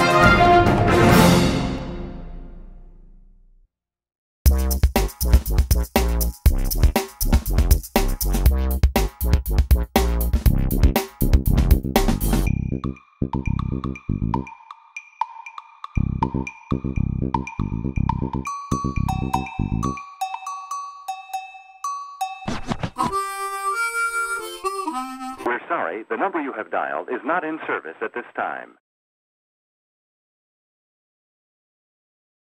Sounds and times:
Theme music: 0.0s - 3.2s, 23.0s - 25.5s.

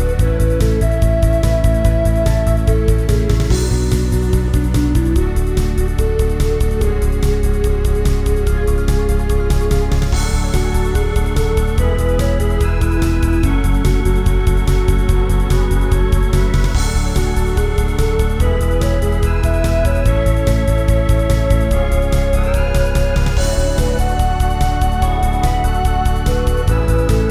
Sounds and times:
House music: 0.0s - 27.3s.

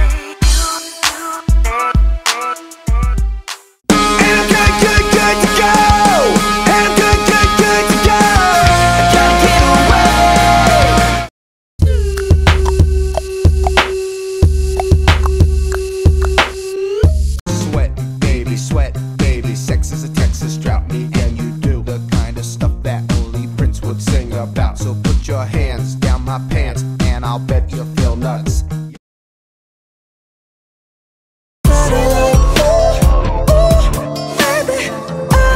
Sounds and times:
Music: 0.0s - 29.0s, 31.7s - 35.5s.

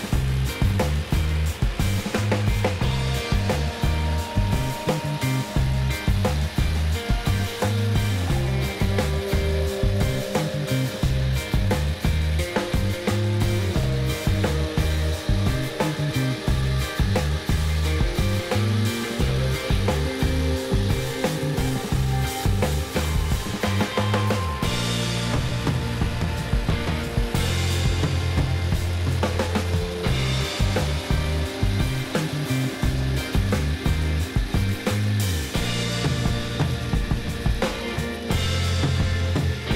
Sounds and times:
Music: 0.0s - 39.7s.

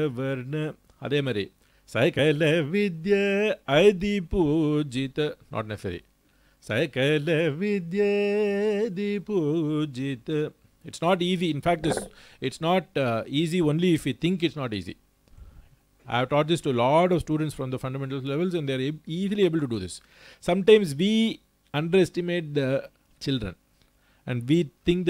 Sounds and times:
Speech: 0.0s - 2.2s, 5.0s - 6.1s, 10.9s - 15.0s, 16.1s - 23.6s, 24.3s - 25.0s.

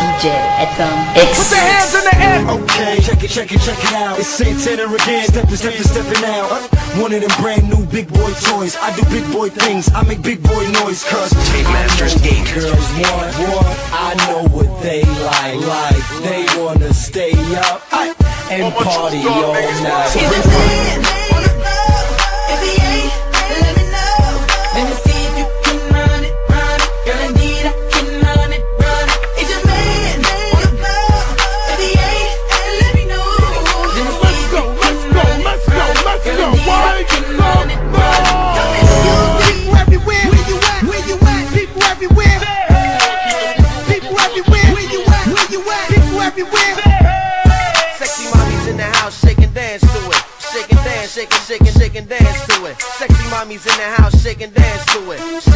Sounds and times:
Music: 0.0s - 55.5s.

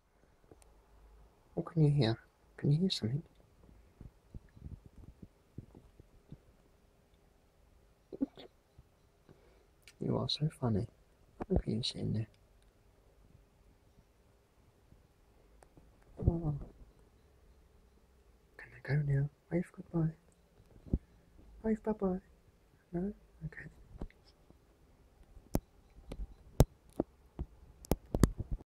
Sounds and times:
Speech: 1.6s - 3.3s, 10.0s - 12.4s, 16.2s - 16.7s, 18.6s - 20.2s, 21.6s - 22.3s, 22.9s - 23.8s.

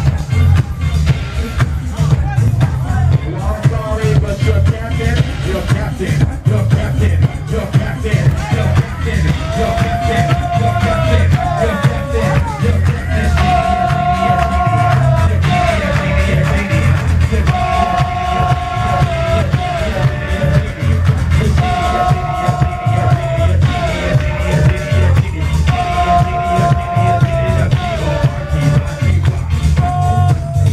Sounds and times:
Music: 0.0s - 30.7s.

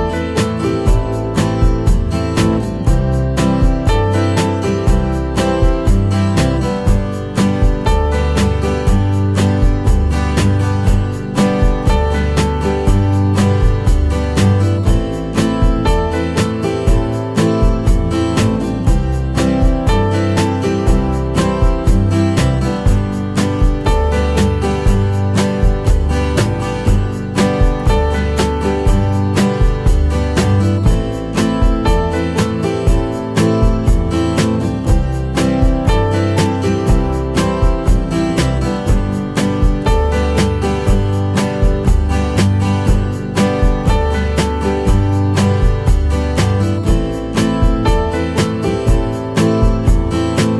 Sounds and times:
Music: 0.0s - 50.5s.

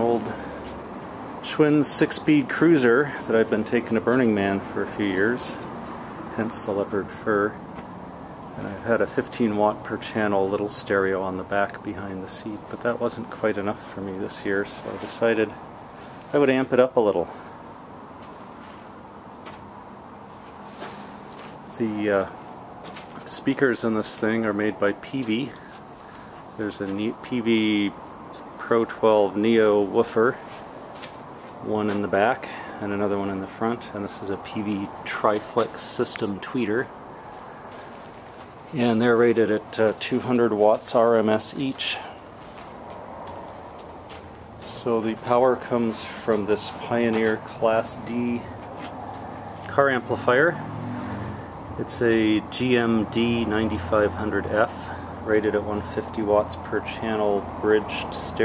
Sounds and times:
Speech: 0.0s - 0.6s, 1.4s - 5.7s, 6.3s - 7.6s, 8.6s - 15.6s, 16.3s - 17.4s, 21.8s - 22.4s, 23.2s - 25.7s, 26.6s - 30.5s, 31.6s - 36.9s, 38.7s - 42.2s, 44.6s - 48.6s, 49.7s - 50.6s, 51.8s - 58.4s.

